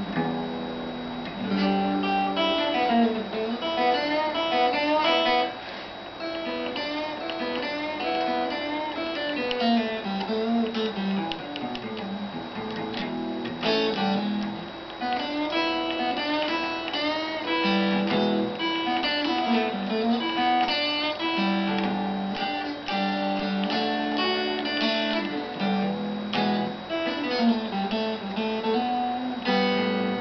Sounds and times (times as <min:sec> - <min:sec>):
Acoustic guitar: 0:00.0 - 0:30.2
Strum: 0:00.0 - 0:30.2.